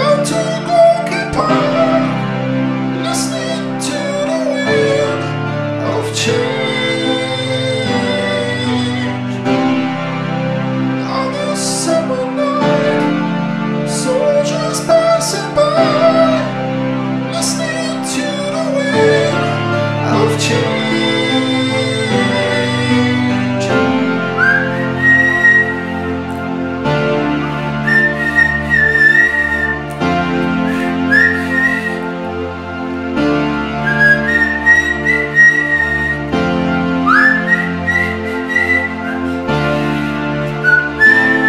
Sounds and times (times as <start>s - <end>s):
Music: 0.0s - 41.4s.